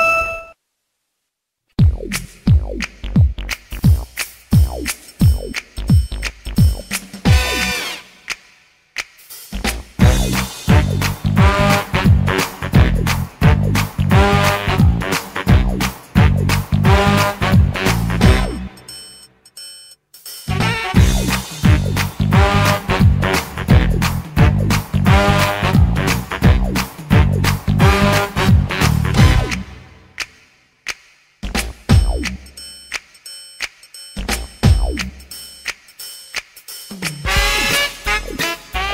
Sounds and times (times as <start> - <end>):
Rhythm and blues: 1.8 - 38.9.